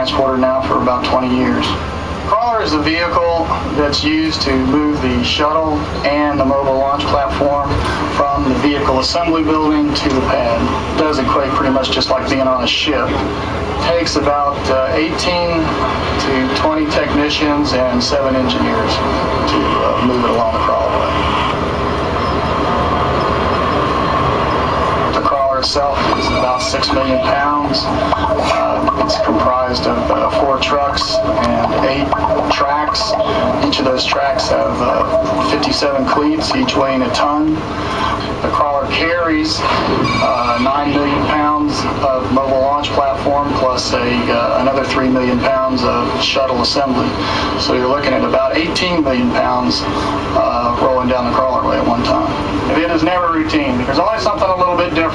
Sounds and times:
Speech: 0.0s - 21.2s, 25.1s - 55.1s.

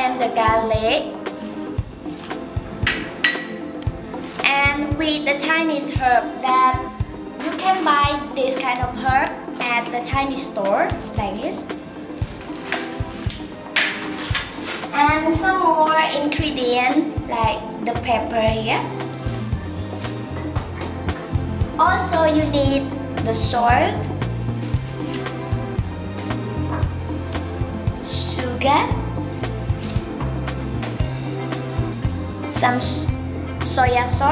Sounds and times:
Music: 0.0s - 34.3s
Speech: 4.5s - 6.9s, 7.5s - 11.7s, 15.0s - 18.9s, 21.8s - 24.1s, 28.0s - 29.0s, 32.5s - 34.3s.

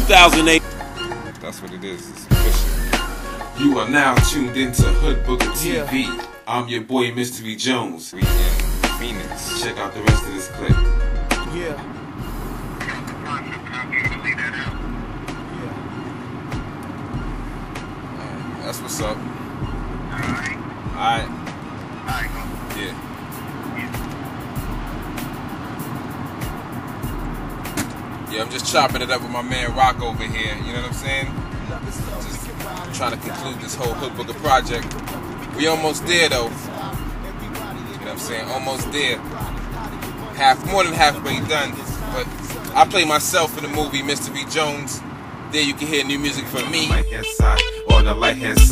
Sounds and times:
Speech: 0.0s - 0.6s, 3.6s - 10.8s, 12.8s - 14.7s, 28.3s - 31.3s, 37.6s - 39.3s, 40.4s - 45.0s, 45.6s - 47.0s
Music: 0.0s - 6.6s, 8.2s - 43.0s, 46.8s - 48.7s.

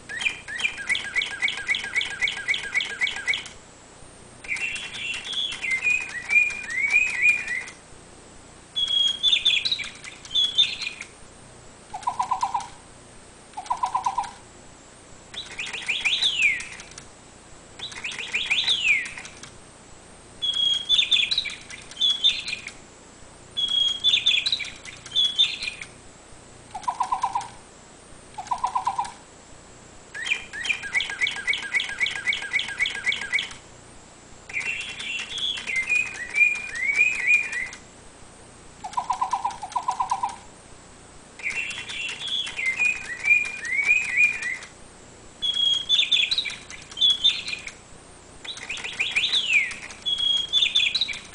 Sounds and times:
Chirp, tweet: 0.1s - 3.5s, 4.4s - 7.8s, 8.8s - 11.1s, 12.0s - 12.7s, 13.6s - 14.4s, 15.3s - 16.9s, 17.8s - 19.4s, 20.4s - 22.8s, 23.6s - 25.9s, 30.2s - 33.6s, 34.5s - 37.8s, 38.9s - 40.4s, 41.4s - 44.7s, 45.4s - 47.8s, 48.4s - 51.3s.

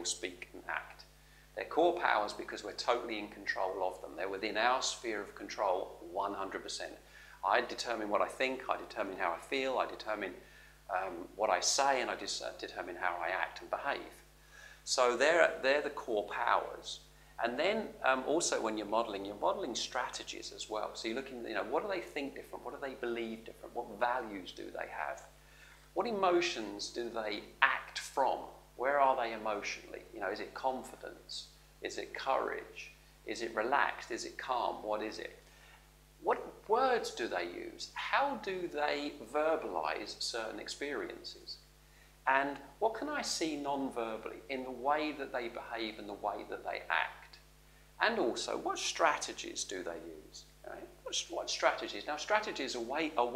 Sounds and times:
Speech: 0.0s - 14.2s, 14.8s - 25.3s, 26.0s - 35.4s, 36.2s - 41.6s, 42.2s - 47.4s, 48.0s - 53.3s
Inside, small room: 0.0s - 53.3s.

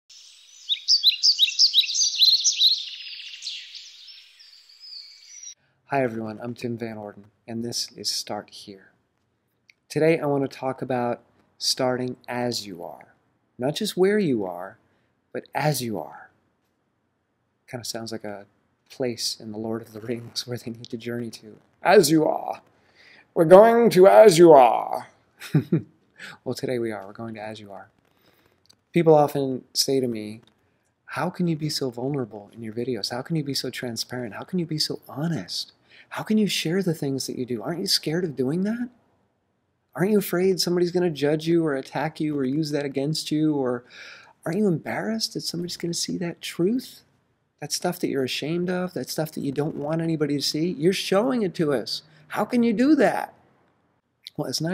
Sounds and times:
Chirp, tweet: 0.1s - 5.6s
Speech: 5.9s - 8.9s, 9.9s - 14.8s, 15.4s - 16.3s, 17.7s - 22.6s, 23.4s - 25.1s, 26.3s - 27.9s, 29.0s - 30.4s, 31.1s - 39.0s, 40.0s - 43.8s, 44.4s - 53.3s, 54.3s - 54.7s.

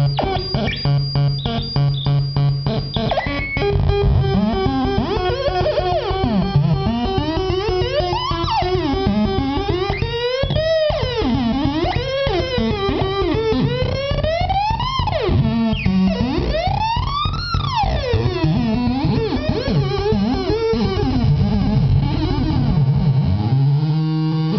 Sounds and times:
Tapping (guitar technique): 0.0s - 23.5s.

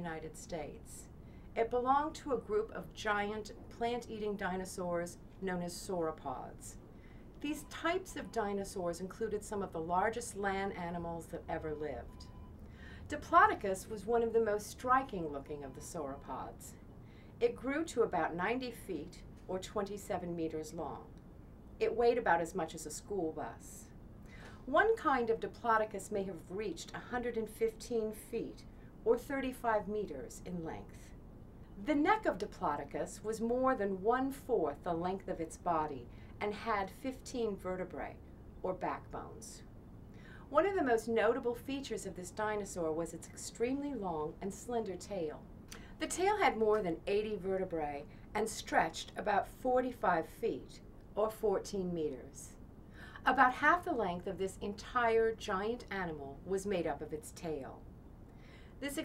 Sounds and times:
Speech: 0.0s - 6.8s, 7.4s - 12.2s, 13.1s - 16.8s, 17.4s - 21.1s, 21.8s - 23.9s, 24.7s - 31.2s, 31.8s - 39.7s, 40.5s - 52.6s, 53.2s - 57.8s, 58.8s - 59.0s.

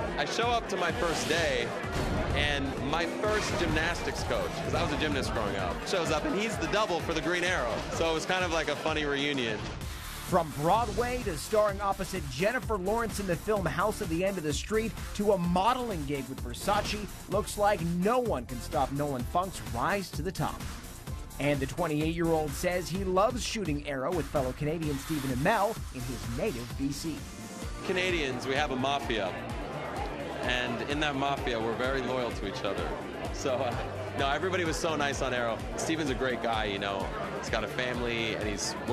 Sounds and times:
Music: 0.0s - 38.9s
Speech: 0.2s - 1.7s, 2.4s - 9.6s, 10.3s - 20.6s, 21.4s - 27.2s, 27.8s - 29.4s, 30.5s - 38.9s.

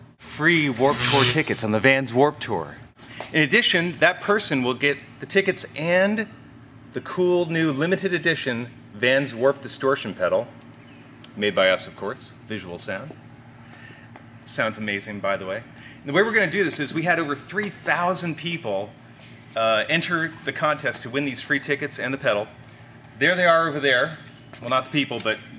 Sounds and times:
Speech: 0.3s - 6.3s, 7.0s - 10.5s, 11.3s - 13.2s, 14.5s - 18.9s, 19.6s - 22.5s, 23.2s - 25.5s.

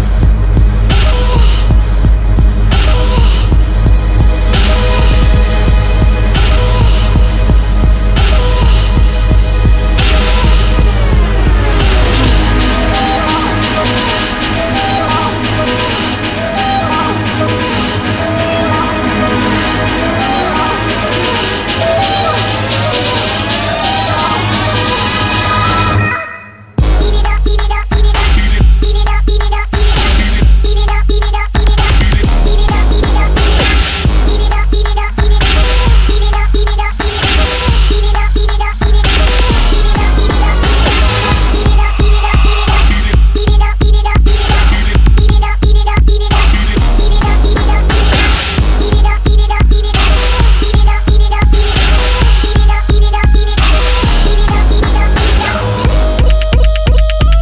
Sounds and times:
Music: 0.0s - 57.4s.

